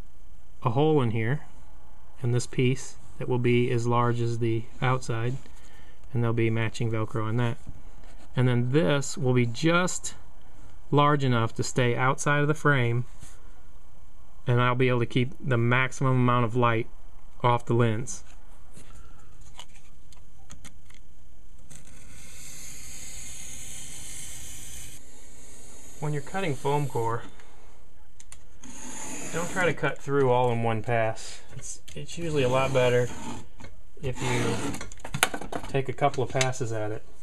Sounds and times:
Speech: 0:00.6 - 0:01.5, 0:02.2 - 0:05.4, 0:06.1 - 0:07.6, 0:08.4 - 0:10.2, 0:10.9 - 0:13.1, 0:14.5 - 0:18.3, 0:26.0 - 0:27.3, 0:29.3 - 0:33.2, 0:34.0 - 0:34.8, 0:35.7 - 0:37.1.

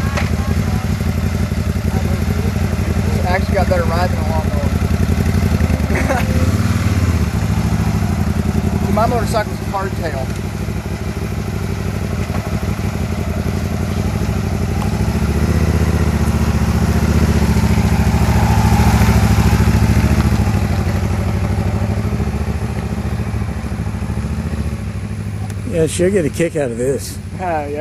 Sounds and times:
Motorcycle: 0:00.0 - 0:27.8
Speech: 0:01.9 - 0:04.8, 0:25.7 - 0:27.8.

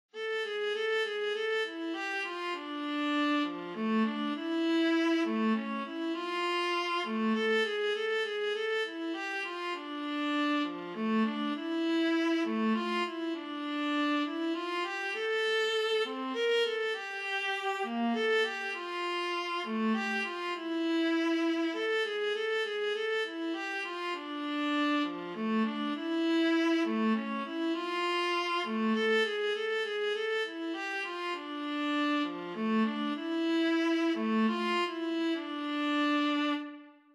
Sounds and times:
Bowed string instrument: 0:00.1 - 0:37.1.

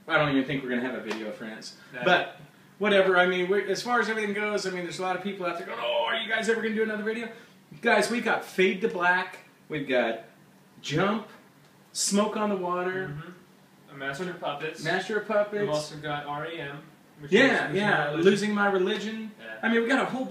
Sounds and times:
Speech: 0:00.0 - 0:20.3.

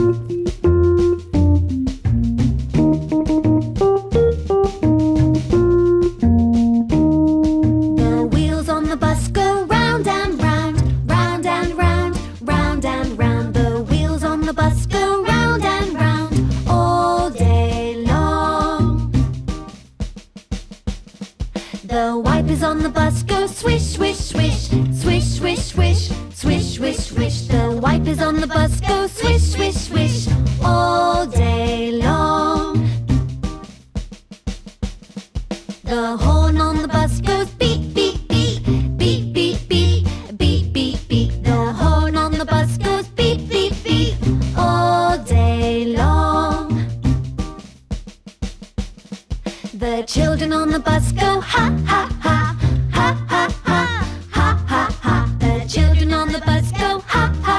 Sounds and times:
Music: 0:00.0 - 0:57.5.

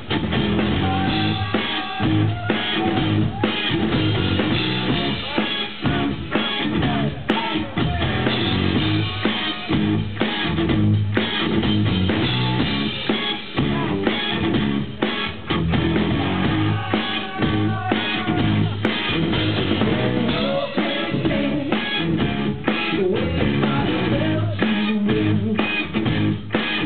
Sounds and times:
Music: 0:00.0 - 0:26.8.

